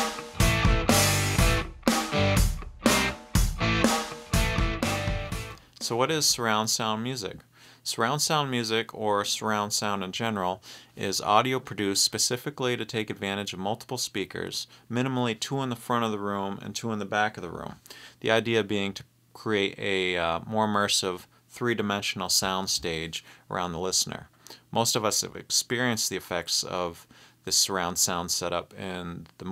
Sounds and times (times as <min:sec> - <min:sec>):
Speech: 0:05.8 - 0:29.5.